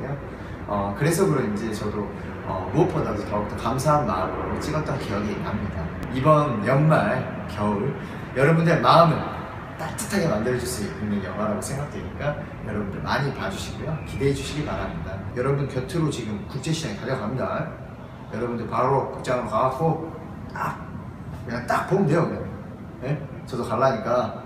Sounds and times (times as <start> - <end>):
Speech: 0.0 - 20.8, 21.4 - 24.4.